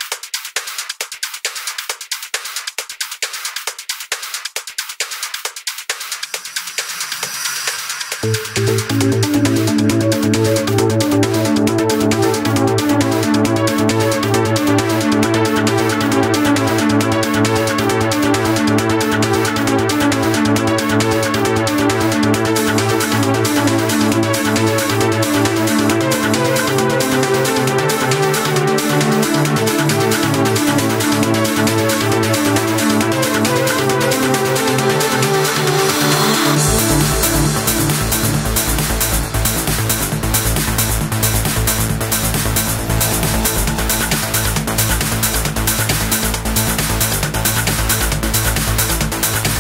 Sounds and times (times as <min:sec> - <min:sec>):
Trance music: 0:02.4 - 0:49.6.